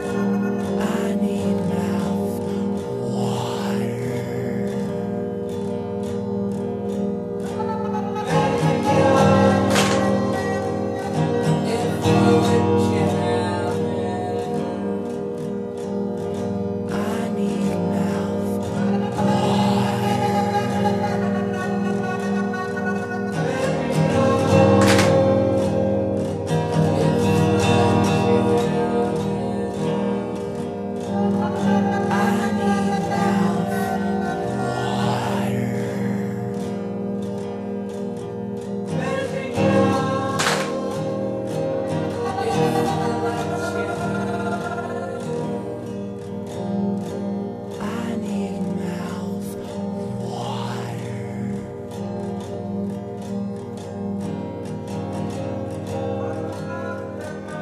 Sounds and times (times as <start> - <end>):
Music: 0.0 - 57.6.